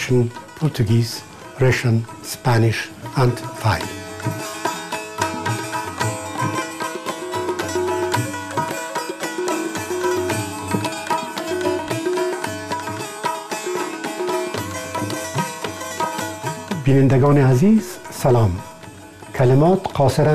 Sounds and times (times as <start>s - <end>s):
Traditional music: 0.0s - 20.3s.